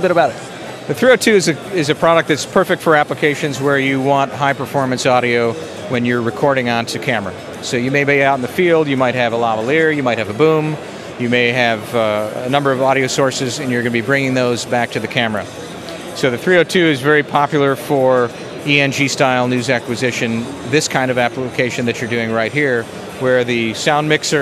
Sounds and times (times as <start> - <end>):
Speech: 0.0 - 15.6, 16.2 - 24.4
Crowd: 0.0 - 24.4.